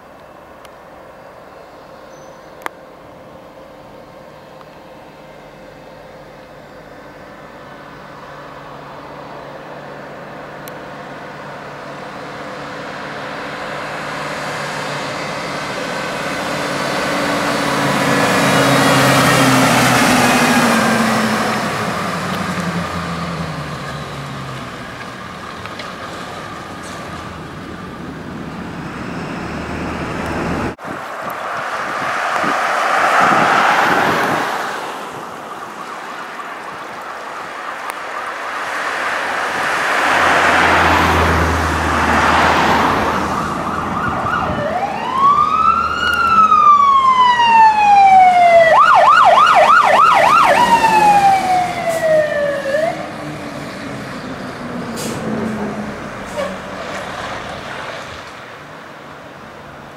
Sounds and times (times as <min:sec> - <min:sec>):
Car: 0:00.0 - 0:59.9
Engine: 0:00.0 - 0:59.9
Truck: 0:00.0 - 0:59.9.